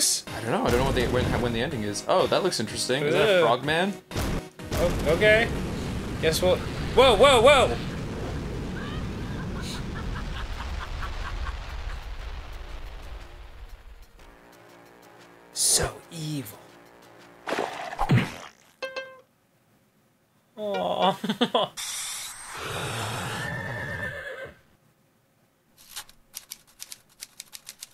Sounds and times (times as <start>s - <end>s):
Music: 0.0s - 5.5s, 13.2s - 17.7s, 18.8s - 19.3s
Speech: 15.6s - 16.7s.